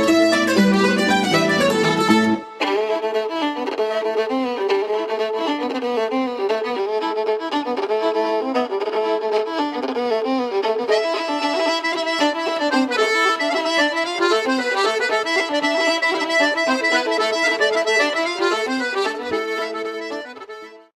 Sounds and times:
Middle Eastern music: 0.0 - 20.9.

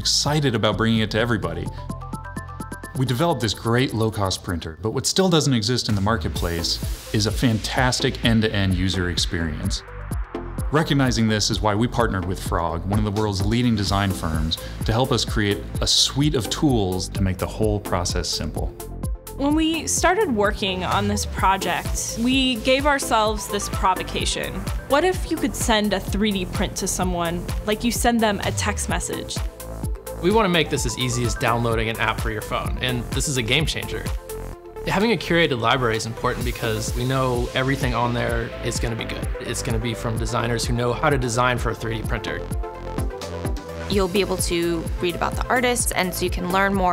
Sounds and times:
Speech: 0.0 - 1.7, 3.0 - 9.8, 10.7 - 18.7, 19.4 - 29.4, 30.2 - 34.1, 34.9 - 42.4, 43.9 - 46.9
Music: 0.0 - 46.9.

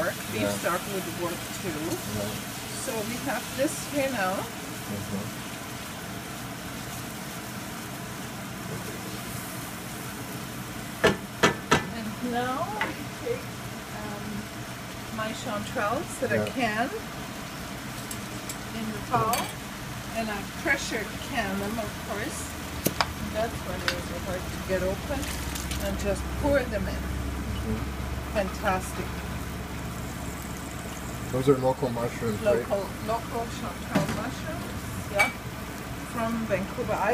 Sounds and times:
Frying (food): 0.0 - 37.1.

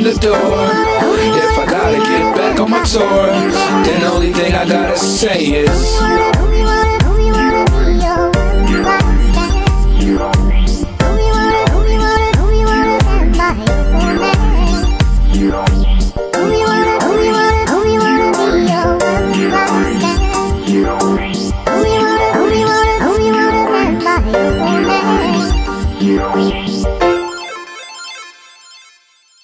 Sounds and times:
Hip hop music: 0.0 - 28.9.

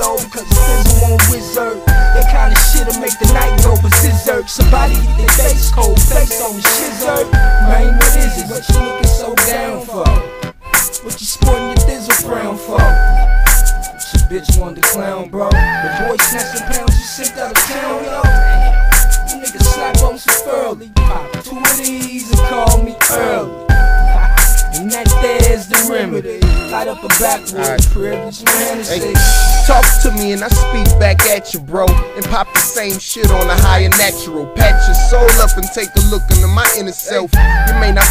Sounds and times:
Rapping: 0.0 - 10.3, 10.9 - 13.2, 14.0 - 23.5, 24.1 - 38.1
Hip hop music: 0.0 - 38.1.

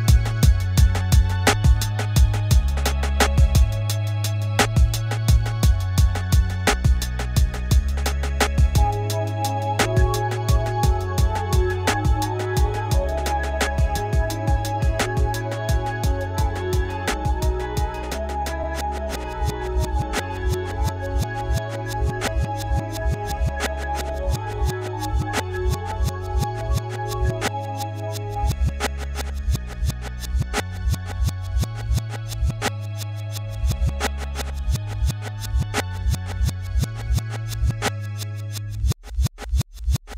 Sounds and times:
Music: 0.0 - 40.0.

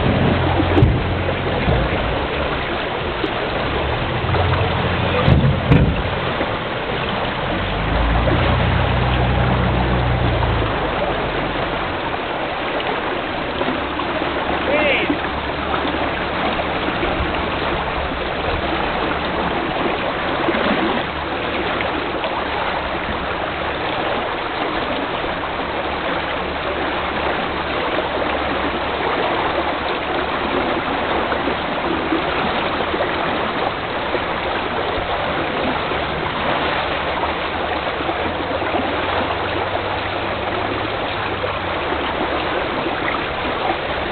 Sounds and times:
Vehicle: 0.0 - 44.1.

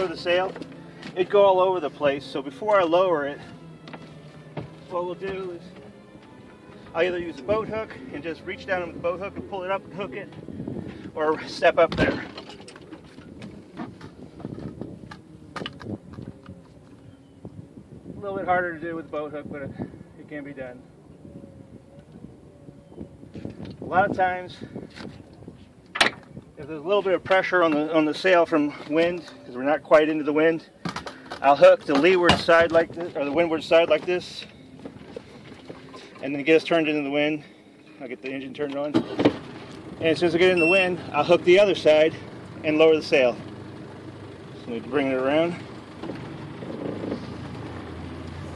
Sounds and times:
Music: 2.2 - 10.9.

